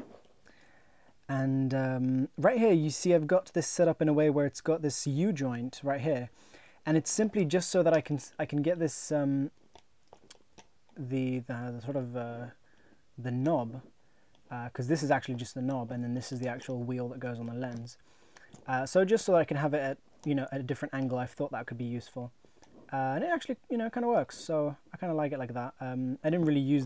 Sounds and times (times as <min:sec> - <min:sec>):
Inside, small room: 0:00.0 - 0:26.8
Speech: 0:01.3 - 0:09.5, 0:11.0 - 0:12.6, 0:13.2 - 0:13.9, 0:14.5 - 0:18.0, 0:18.6 - 0:22.3, 0:22.9 - 0:26.8.